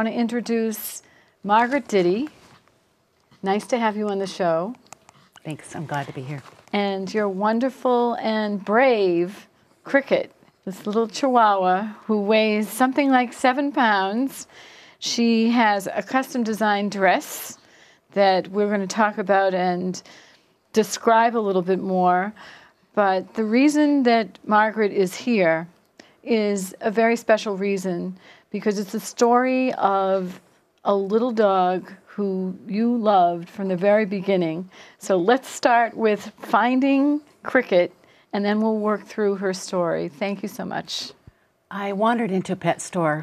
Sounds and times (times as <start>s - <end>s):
Speech: 5.4s - 14.4s, 26.3s - 43.2s.